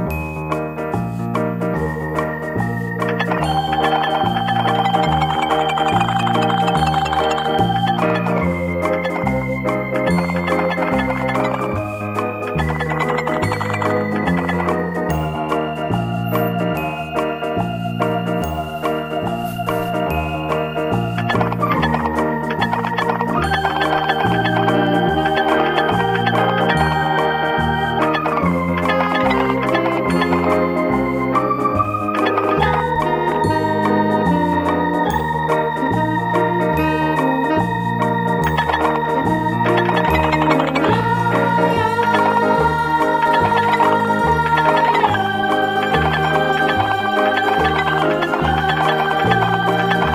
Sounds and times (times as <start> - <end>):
Music: 0.0 - 50.1.